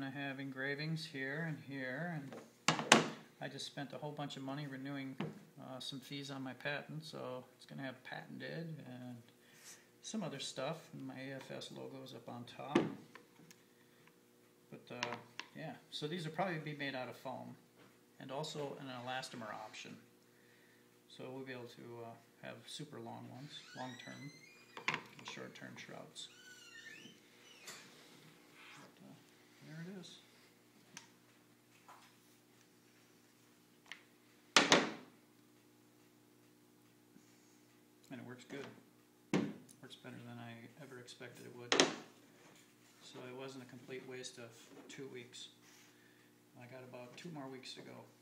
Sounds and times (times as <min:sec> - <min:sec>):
Speech: 0:00.0 - 0:02.4, 0:03.4 - 0:09.3, 0:10.0 - 0:13.0, 0:14.7 - 0:17.6, 0:18.2 - 0:20.1, 0:21.1 - 0:24.4, 0:25.2 - 0:26.4, 0:29.0 - 0:30.3, 0:38.1 - 0:38.8, 0:39.8 - 0:41.9, 0:43.0 - 0:45.6, 0:46.6 - 0:48.2.